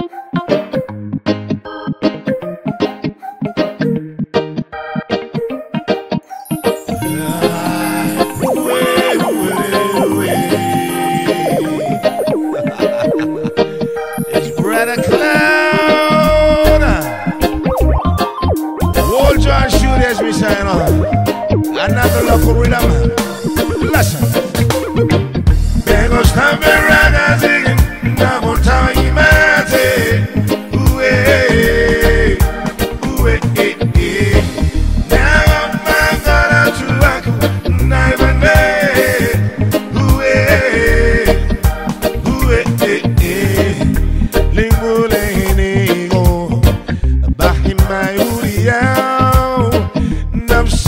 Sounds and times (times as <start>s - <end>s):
Music: 0.0s - 50.8s.